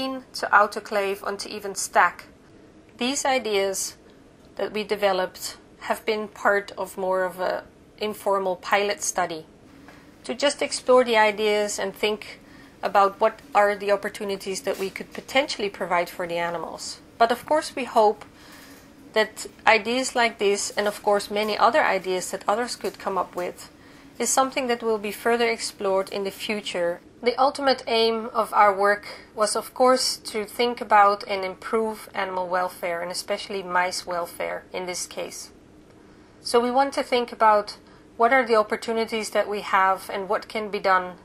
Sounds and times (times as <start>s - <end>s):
Speech: 0.0s - 2.3s, 3.0s - 4.0s, 4.6s - 9.5s, 10.2s - 18.3s, 19.1s - 35.5s, 36.4s - 41.2s.